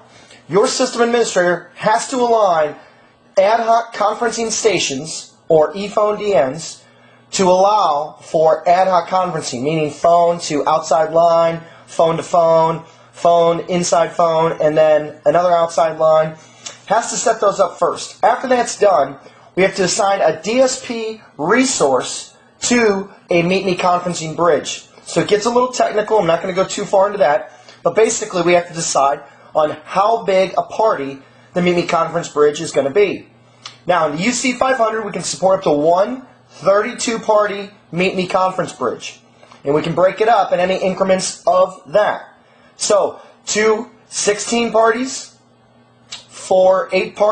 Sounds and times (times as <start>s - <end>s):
Speech: 0.0s - 45.4s, 46.1s - 47.3s.